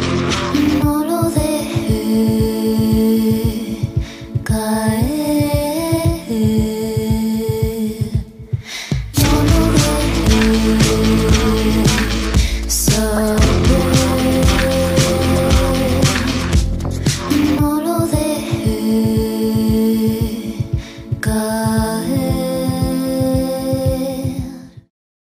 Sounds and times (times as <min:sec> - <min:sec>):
Music: 0:00.0 - 0:24.9.